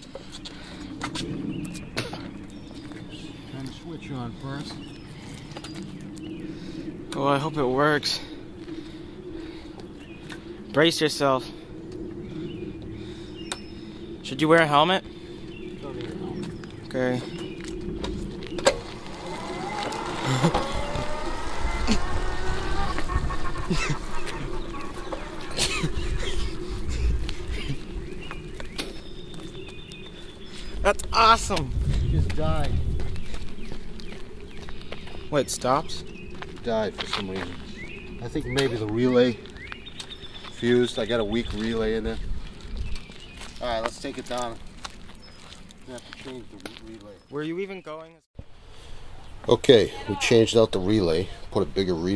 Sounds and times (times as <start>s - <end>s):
Outside, rural or natural: 0.0s - 52.1s
Vehicle: 15.8s - 29.6s.